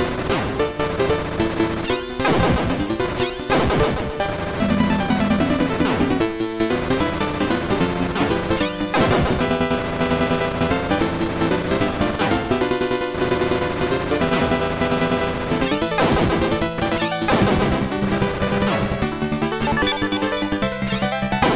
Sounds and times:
Music: 0:00.0 - 0:21.5.

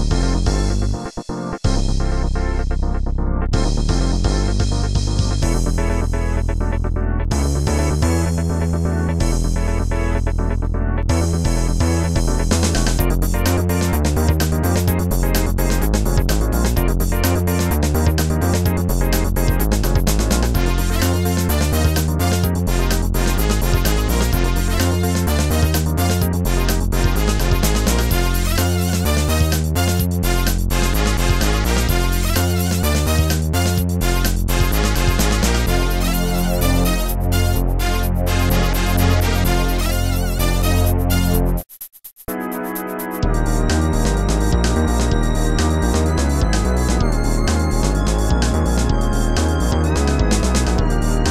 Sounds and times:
Music: 0:00.0 - 0:51.3.

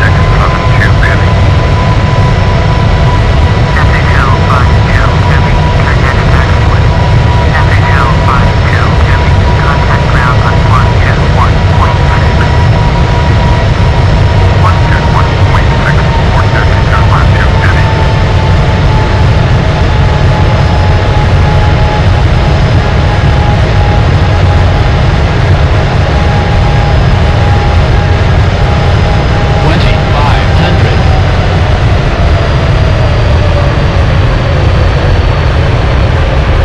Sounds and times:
Speech: 0:00.0 - 0:01.3, 0:03.8 - 0:06.9, 0:07.5 - 0:12.5, 0:14.6 - 0:17.9, 0:29.6 - 0:31.0.

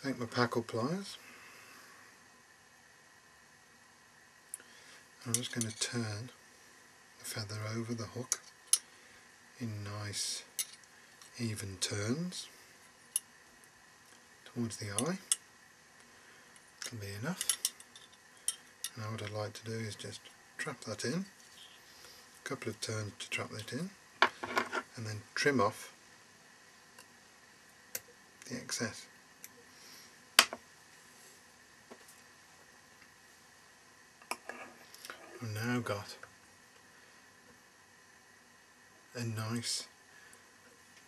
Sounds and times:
Speech: 0:00.0 - 0:01.2, 0:05.2 - 0:06.4, 0:07.2 - 0:08.4, 0:09.6 - 0:10.5, 0:11.4 - 0:12.6, 0:14.5 - 0:15.3, 0:16.9 - 0:17.4, 0:18.9 - 0:21.4, 0:22.4 - 0:24.0, 0:24.9 - 0:26.0, 0:28.4 - 0:29.1, 0:35.4 - 0:36.3, 0:39.1 - 0:40.0.

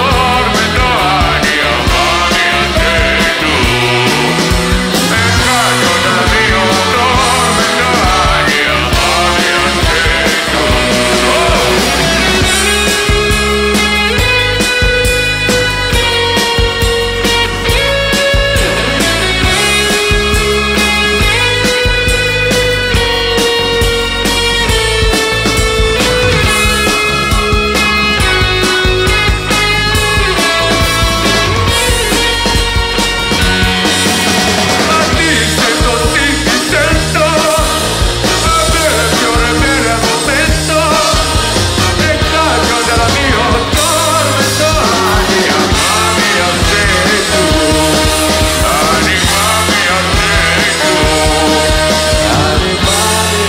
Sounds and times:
Singing: 0:00.0 - 0:12.6, 0:34.7 - 0:53.4
Music: 0:00.0 - 0:53.4.

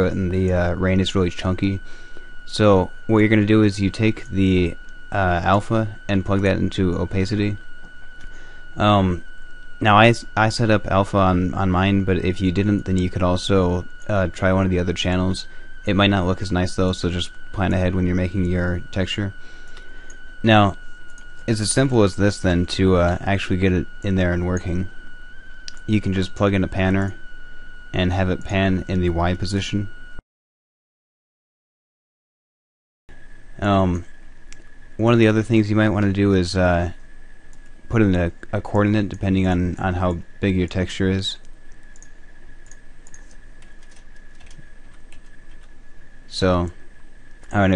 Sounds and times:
Speech: 0:00.0 - 0:01.8, 0:02.5 - 0:07.6, 0:08.8 - 0:09.2, 0:09.8 - 0:19.4, 0:20.4 - 0:20.8, 0:21.5 - 0:24.9, 0:25.7 - 0:27.2, 0:28.0 - 0:29.9, 0:33.6 - 0:34.1, 0:35.0 - 0:37.0, 0:37.9 - 0:41.4, 0:46.3 - 0:46.8, 0:47.5 - 0:47.7.

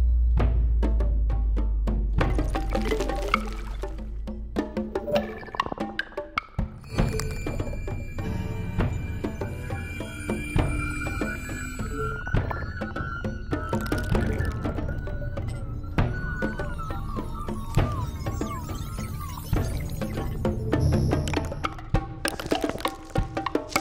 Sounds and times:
Wood block: 0:02.2 - 0:08.0, 0:19.6 - 0:23.8.

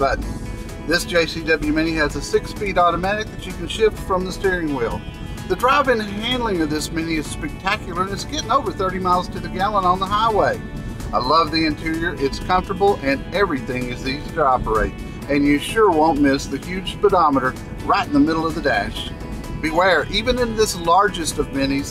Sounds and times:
Speech: 0:00.0 - 0:00.2, 0:00.9 - 0:21.9
Music: 0:00.0 - 0:21.9.

